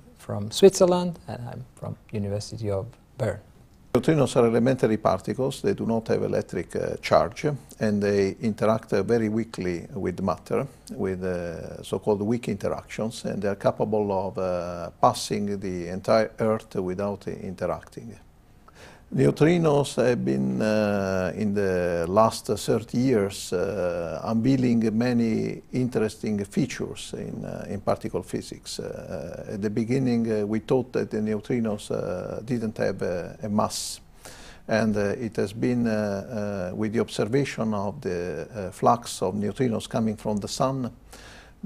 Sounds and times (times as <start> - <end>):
Speech: 0.2 - 18.2, 19.1 - 34.0, 34.7 - 41.0.